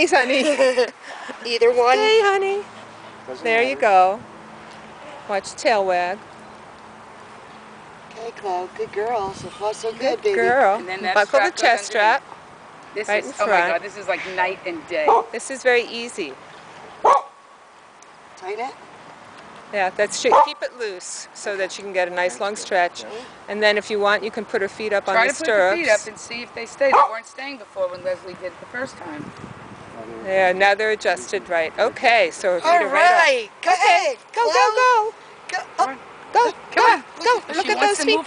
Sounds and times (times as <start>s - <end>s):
Bow-wow: 15.1s - 15.4s, 17.0s - 17.4s.